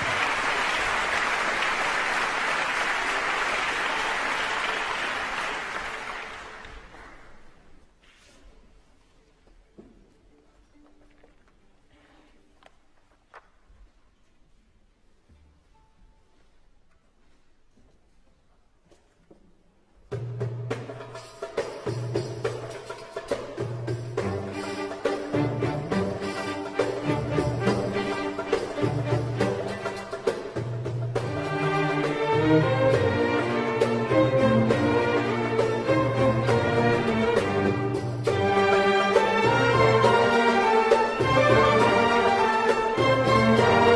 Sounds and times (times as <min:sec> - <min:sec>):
Folk music: 0:20.6 - 0:43.9.